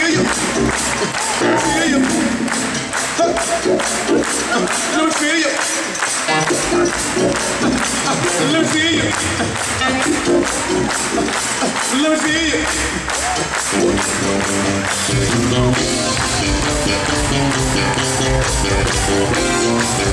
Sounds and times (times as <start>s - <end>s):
Jazz: 13.6s - 20.1s.